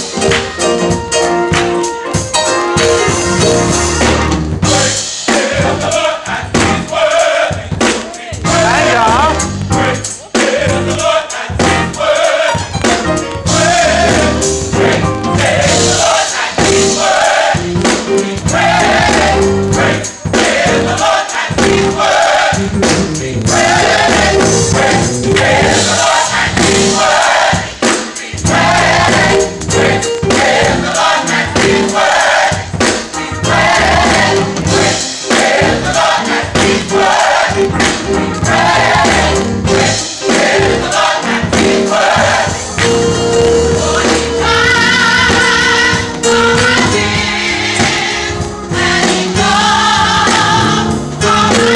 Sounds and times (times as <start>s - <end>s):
Choir: 4.6s - 22.7s, 23.4s - 51.7s
Speech: 8.1s - 9.5s.